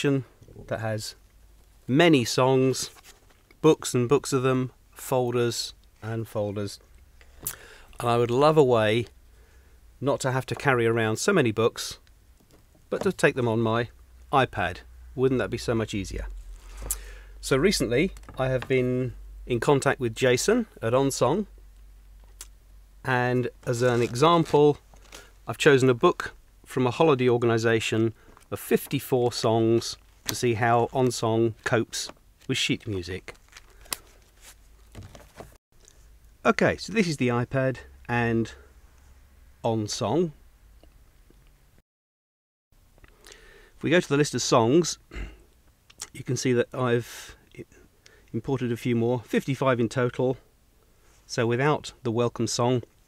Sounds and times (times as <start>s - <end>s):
Speech: 0.0s - 1.2s, 1.9s - 3.0s, 3.6s - 6.8s, 8.0s - 9.1s, 10.0s - 12.0s, 12.9s - 16.4s, 17.4s - 21.5s, 23.0s - 24.8s, 25.5s - 33.4s, 36.4s - 38.7s, 39.6s - 40.4s, 43.8s - 45.2s, 46.0s - 50.5s, 51.3s - 52.9s.